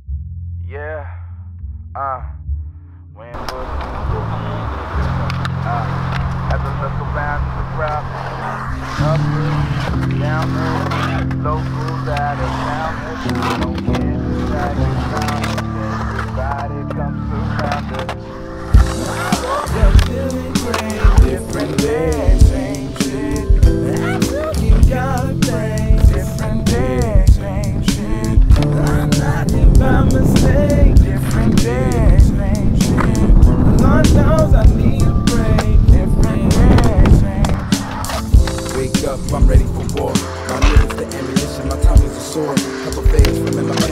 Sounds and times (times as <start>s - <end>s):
Music: 0.0s - 43.9s
Skateboard: 3.4s - 27.2s, 35.1s - 43.9s.